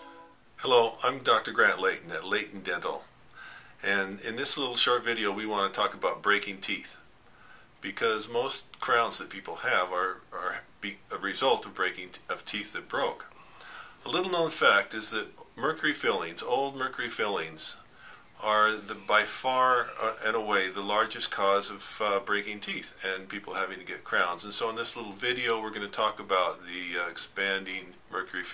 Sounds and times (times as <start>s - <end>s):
Speech: 0.6s - 3.1s, 3.8s - 7.0s, 7.8s - 13.3s, 14.0s - 17.8s, 18.4s - 28.5s.